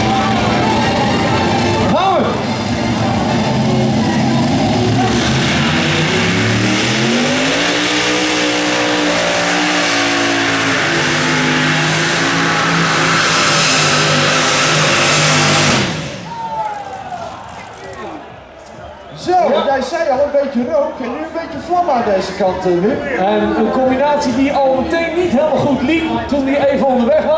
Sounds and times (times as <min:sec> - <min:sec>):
Music: 0:00.0 - 0:06.3, 0:21.4 - 0:27.3
Vehicle: 0:00.0 - 0:27.3
Accelerating, revving, vroom: 0:03.4 - 0:16.2.